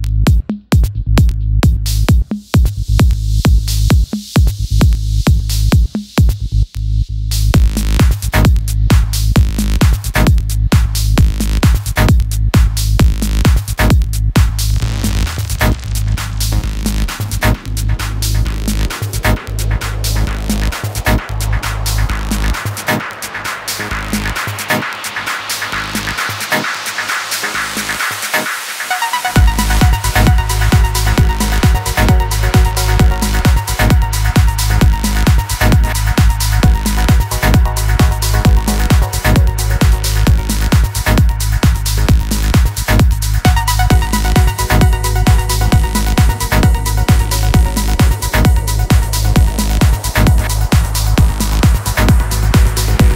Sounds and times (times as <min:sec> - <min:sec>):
Music: 0:00.0 - 0:53.1.